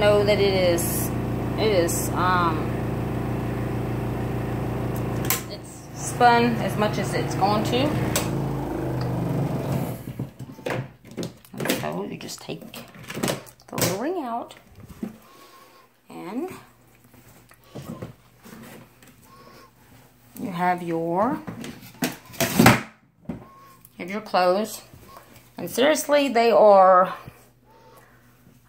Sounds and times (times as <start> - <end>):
Speech: 0.0 - 2.8, 5.5 - 8.1, 11.6 - 12.9, 13.7 - 14.6, 16.1 - 16.7, 20.4 - 21.5, 24.0 - 24.9, 25.6 - 27.3.